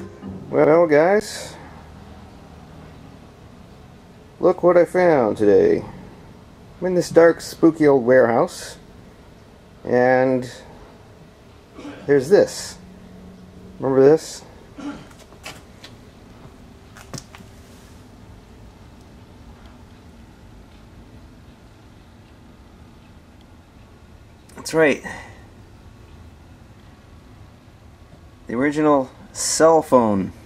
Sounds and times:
Speech: 0:00.0 - 0:01.6, 0:04.4 - 0:06.0, 0:06.8 - 0:08.8, 0:09.8 - 0:10.7, 0:11.9 - 0:12.8, 0:13.8 - 0:14.5, 0:24.5 - 0:25.4, 0:28.5 - 0:30.4.

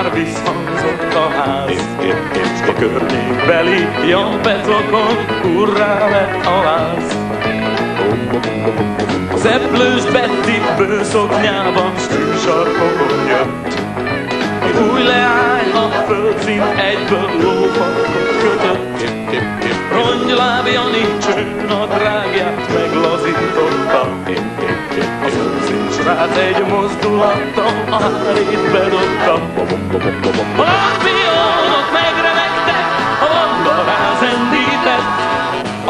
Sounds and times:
Rock and roll: 0:00.0 - 0:35.8.

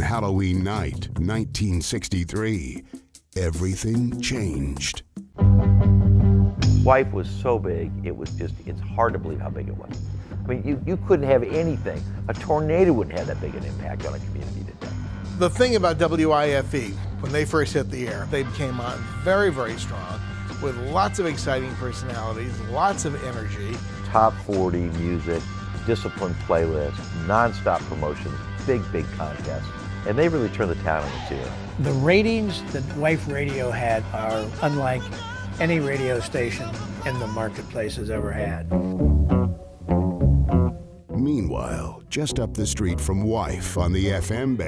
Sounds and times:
Speech: 0:00.0 - 0:02.8, 0:03.4 - 0:05.0, 0:06.8 - 0:14.8, 0:15.4 - 0:38.7, 0:41.2 - 0:44.6
Music: 0:00.0 - 0:44.6.

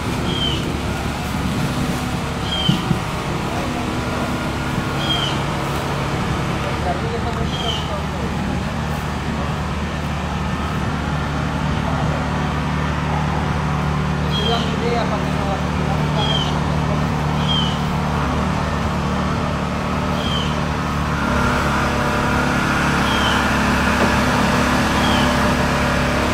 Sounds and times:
Speech: 0:03.4 - 0:05.4, 0:06.6 - 0:09.7, 0:14.2 - 0:17.3.

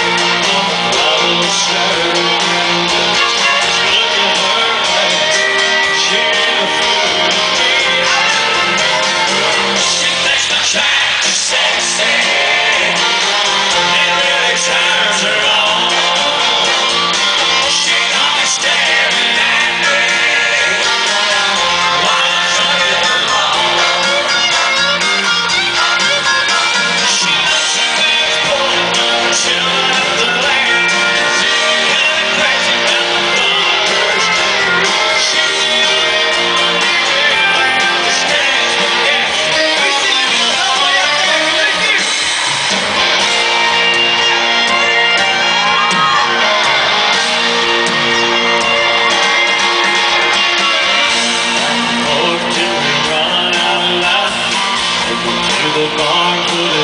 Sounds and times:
Male singing: 0:00.0 - 0:16.7, 0:17.4 - 0:24.8, 0:26.0 - 0:42.1, 0:50.5 - 0:56.8
Music: 0:00.0 - 0:56.8.

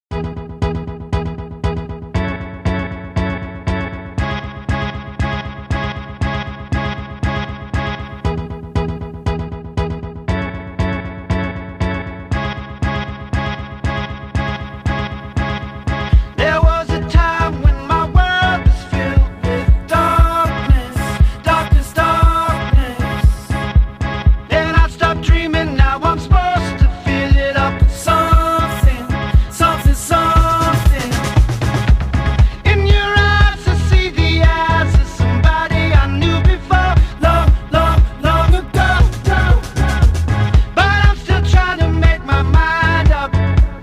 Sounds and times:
Synthesizer: 0:00.0 - 0:43.8.

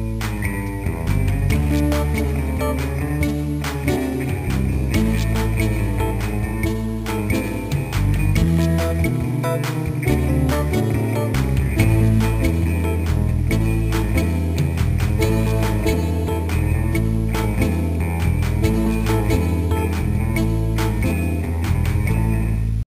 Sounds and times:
Theme music: 0:00.0 - 0:22.3.

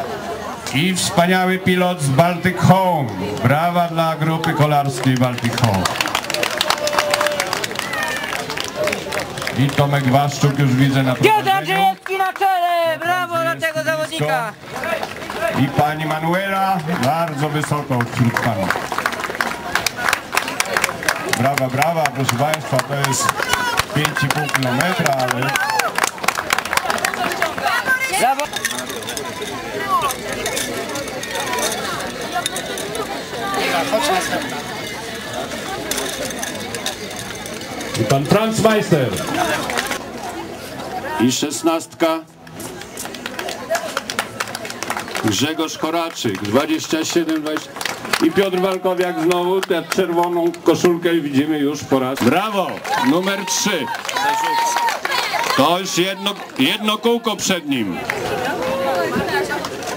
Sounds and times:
Outside, urban or manmade: 0:00.0 - 0:59.9
Run: 0:01.0 - 0:59.9.

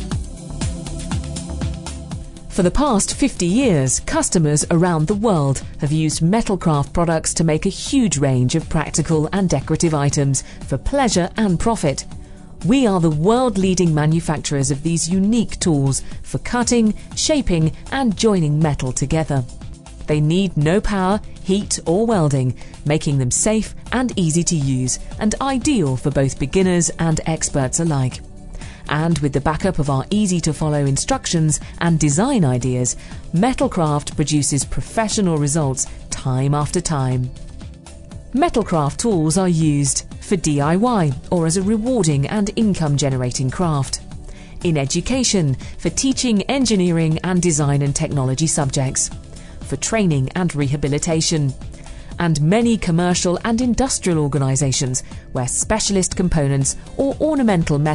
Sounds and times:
Music: 0:00.0 - 0:57.9
Speech: 0:02.5 - 0:12.0, 0:12.6 - 0:19.5, 0:20.1 - 0:28.2, 0:28.9 - 0:37.3, 0:38.4 - 0:44.0, 0:44.6 - 0:49.1, 0:49.7 - 0:51.6, 0:52.2 - 0:57.9.

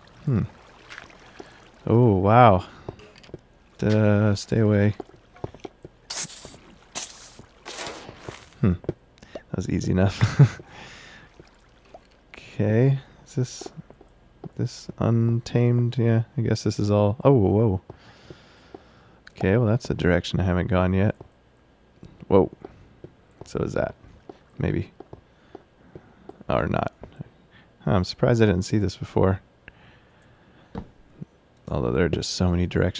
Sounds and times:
Speech: 0:01.8 - 0:02.7, 0:03.8 - 0:05.0, 0:09.5 - 0:10.3, 0:12.3 - 0:13.8, 0:14.6 - 0:17.8, 0:19.3 - 0:21.2, 0:22.3 - 0:22.6, 0:23.4 - 0:24.0, 0:24.6 - 0:24.9, 0:26.5 - 0:27.0, 0:27.8 - 0:29.4, 0:31.7 - 0:33.0.

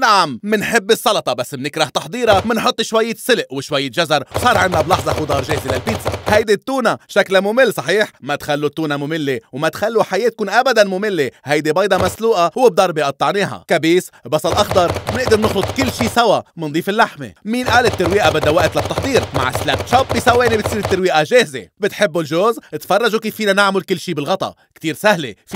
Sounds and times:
Chopping (food): 0:02.3 - 0:02.7, 0:04.3 - 0:06.4, 0:12.0 - 0:12.2, 0:14.5 - 0:16.2, 0:17.6 - 0:21.1.

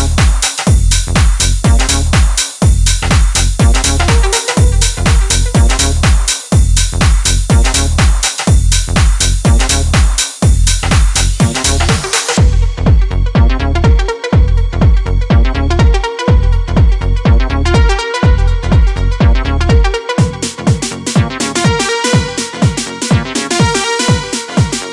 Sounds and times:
Electronica: 0:00.0 - 0:24.9.

